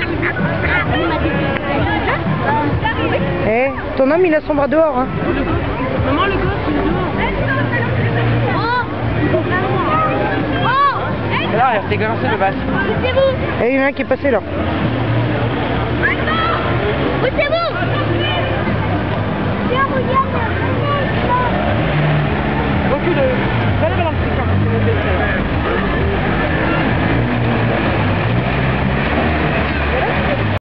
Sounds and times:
Car: 0.0 - 30.6.

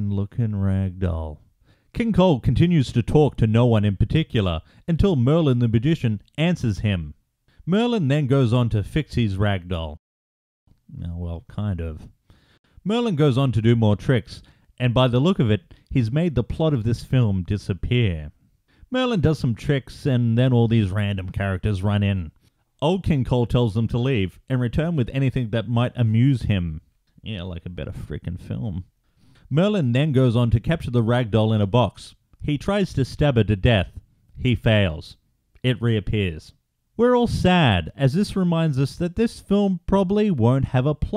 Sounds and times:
Speech: 0.0 - 10.0, 10.9 - 12.2, 12.8 - 28.9, 29.5 - 41.1.

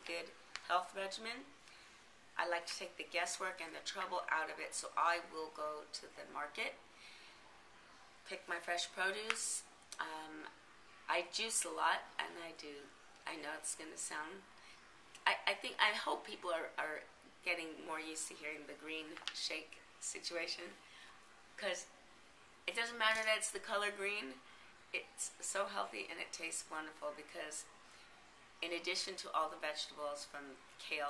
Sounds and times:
Speech: 0.0 - 1.5, 2.4 - 6.8, 8.3 - 14.4, 15.2 - 20.8, 21.6 - 21.9, 22.7 - 24.4, 25.0 - 27.7, 28.6 - 31.0.

